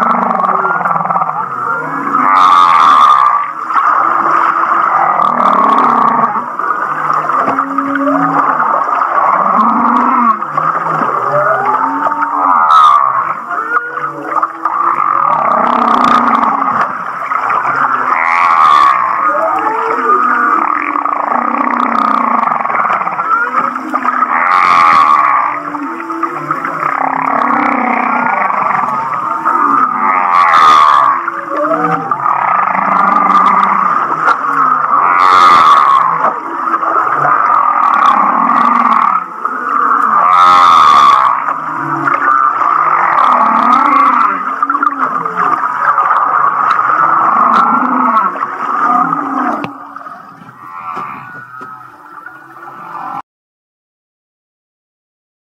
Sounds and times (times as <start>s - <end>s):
Whale vocalization: 0.0s - 53.3s.